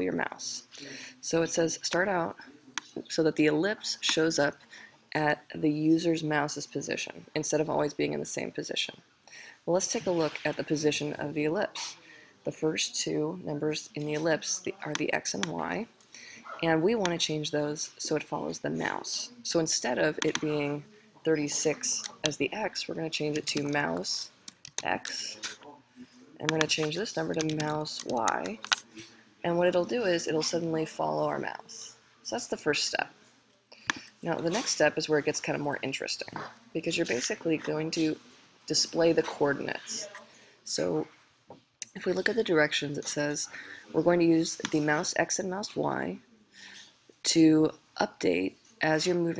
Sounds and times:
Speech: 0:00.0 - 0:09.0, 0:09.6 - 0:33.2, 0:34.2 - 0:41.1, 0:41.8 - 0:46.3, 0:47.2 - 0:49.3.

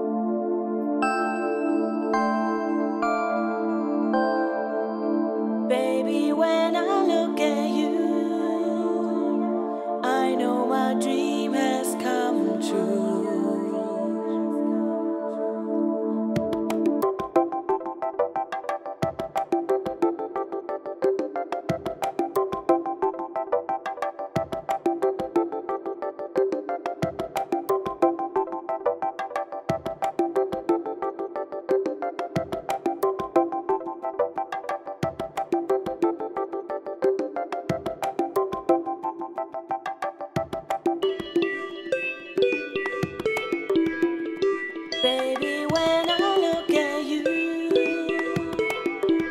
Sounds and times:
Electronic music: 0:00.0 - 0:49.3.

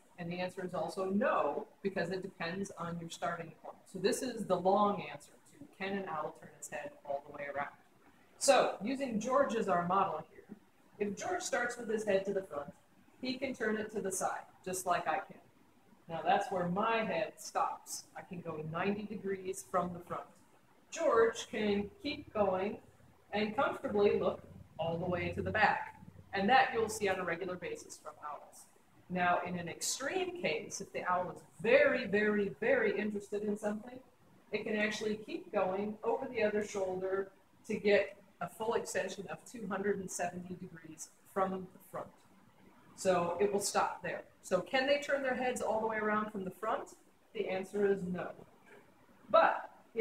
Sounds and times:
Speech: 0:00.2 - 0:07.7, 0:08.4 - 0:15.3, 0:16.1 - 0:20.2, 0:21.0 - 0:34.0, 0:34.6 - 0:42.1, 0:43.0 - 0:48.4, 0:49.3 - 0:50.0.

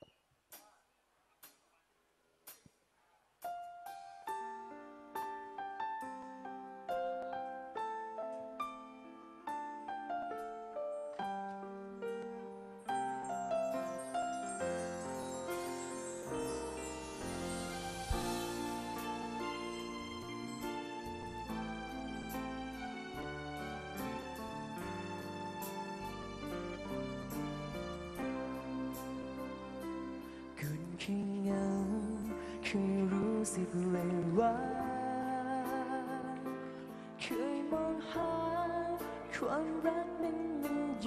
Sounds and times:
Jingle bell: 0:12.9 - 0:22.6.

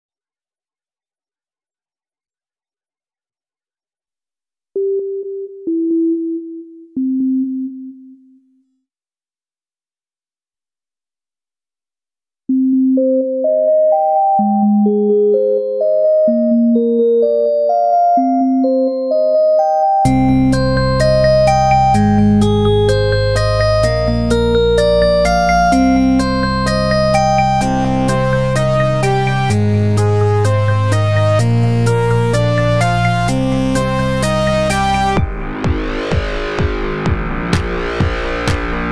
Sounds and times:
Sidetone: 0:04.8 - 0:08.7.

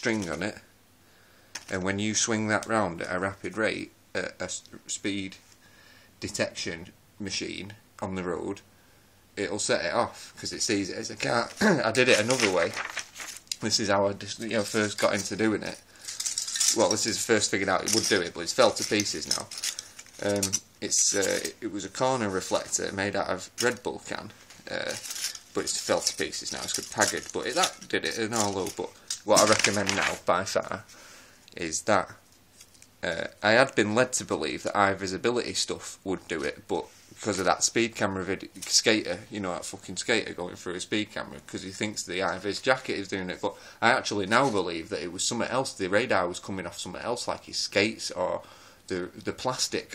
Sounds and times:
Speech: 0:00.0 - 0:00.7, 0:01.7 - 0:05.4, 0:06.2 - 0:08.6, 0:09.4 - 0:12.8, 0:13.5 - 0:15.8, 0:16.6 - 0:19.6, 0:20.2 - 0:30.9, 0:31.5 - 0:32.2, 0:33.0 - 0:49.9.

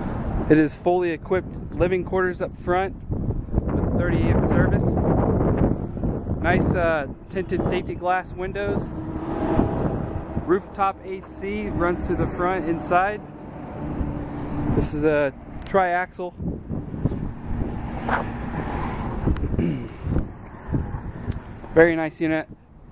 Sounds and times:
Speech: 0:00.5 - 0:02.9, 0:03.8 - 0:04.9, 0:06.4 - 0:08.9, 0:10.5 - 0:13.2, 0:14.8 - 0:16.4, 0:21.8 - 0:22.6.

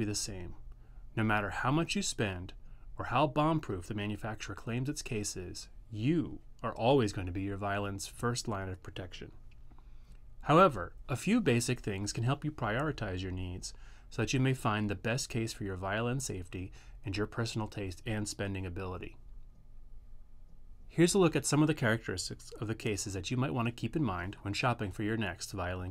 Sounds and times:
Speech: 0:00.0 - 0:00.6, 0:01.2 - 0:09.4, 0:10.4 - 0:19.2, 0:20.9 - 0:25.9.

